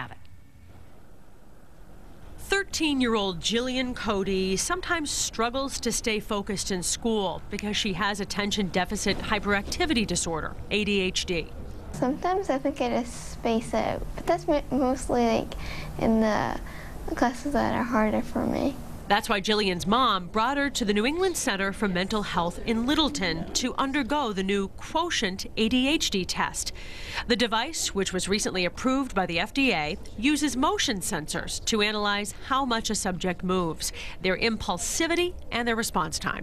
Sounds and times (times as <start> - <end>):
Female speech, woman speaking: 2.4 - 36.4.